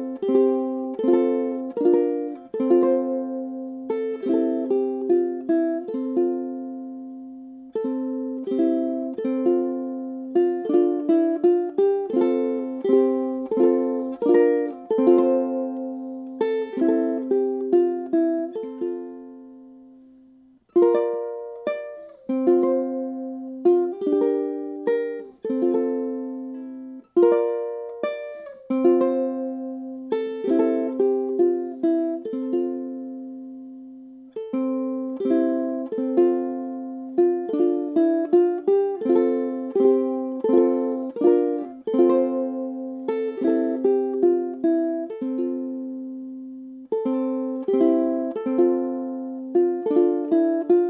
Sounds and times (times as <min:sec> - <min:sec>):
Inside, small room: 0:00.0 - 0:50.9
Ukulele: 0:00.0 - 0:50.9.